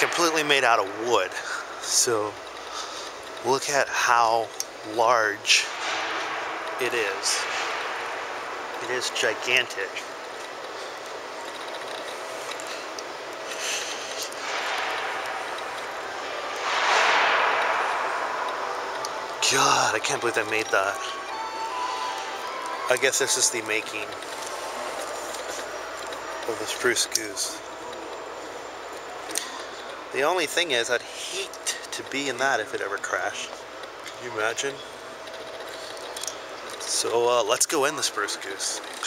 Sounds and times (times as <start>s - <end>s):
Speech: 0.0s - 2.4s, 3.4s - 5.7s, 6.8s - 7.4s, 8.8s - 10.0s, 19.4s - 21.2s, 22.9s - 24.1s, 26.5s - 27.6s, 30.1s - 33.5s, 34.2s - 34.8s, 36.8s - 39.0s.